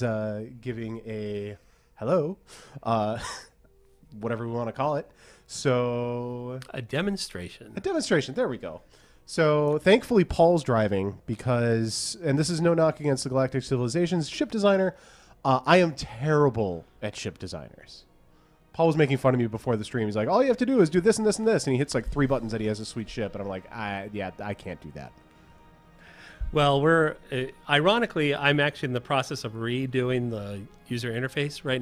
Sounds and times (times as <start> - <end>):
Speech: 0.0 - 3.3, 4.1 - 18.1, 18.8 - 25.1, 26.5 - 31.8.